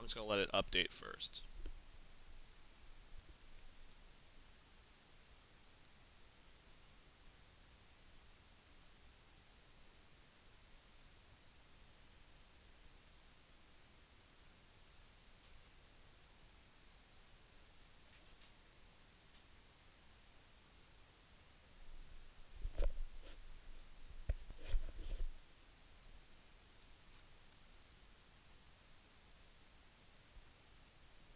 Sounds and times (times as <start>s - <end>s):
Inside, small room: 0.0s - 31.3s
Silence: 0.0s - 31.3s.